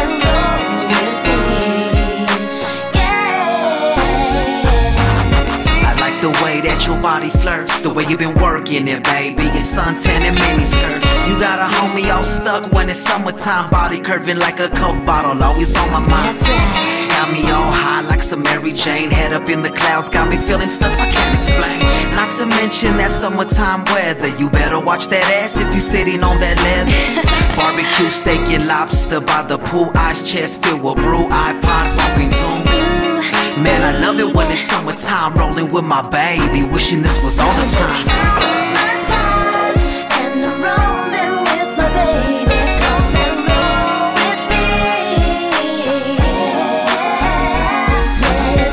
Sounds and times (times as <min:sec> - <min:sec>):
Music: 0:00.0 - 0:48.7.